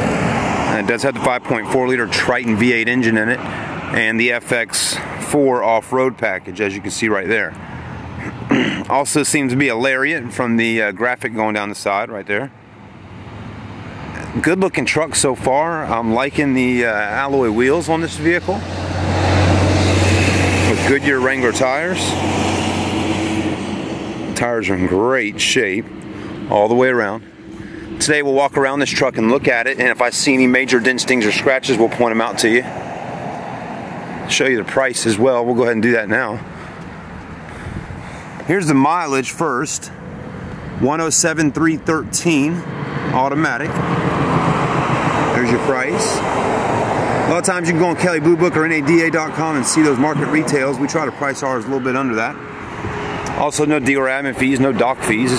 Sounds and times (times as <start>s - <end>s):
Car: 0.0s - 55.3s
Speech: 0.7s - 7.6s, 8.8s - 12.6s, 14.2s - 18.6s, 20.7s - 22.2s, 24.4s - 25.9s, 26.5s - 27.2s, 28.0s - 32.7s, 34.3s - 36.5s, 38.5s - 40.0s, 40.8s - 43.8s, 45.3s - 46.2s, 47.3s - 52.4s, 53.4s - 55.3s.